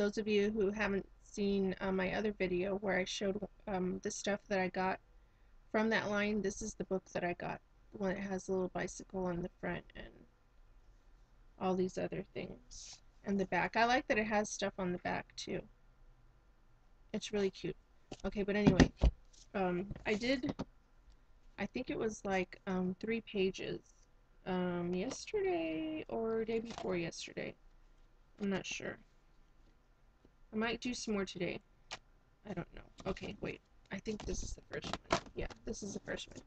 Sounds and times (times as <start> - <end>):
Speech: 0.0 - 5.0, 5.8 - 10.2, 11.6 - 15.7, 17.2 - 18.9, 19.6 - 20.6, 21.6 - 23.8, 24.5 - 27.6, 28.4 - 29.0, 30.6 - 31.6, 32.5 - 36.4.